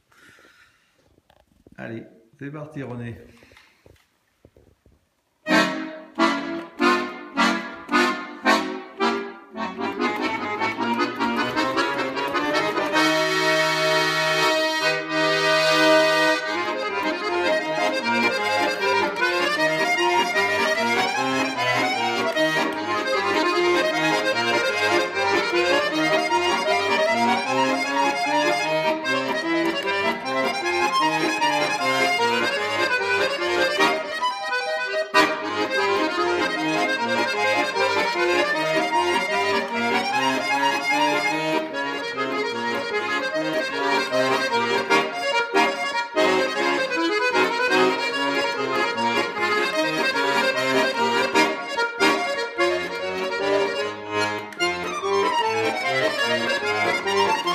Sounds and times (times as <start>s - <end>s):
Music: 5.5s - 57.5s.